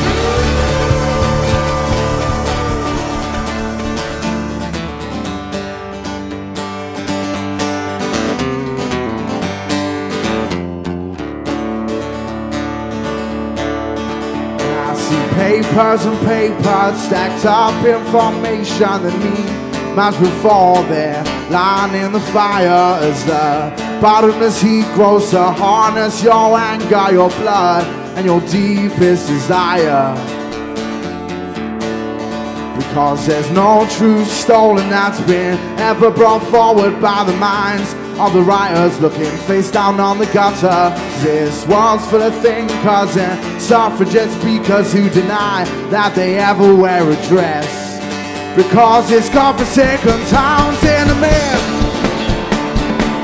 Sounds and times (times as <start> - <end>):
Blues: 0.0 - 53.2.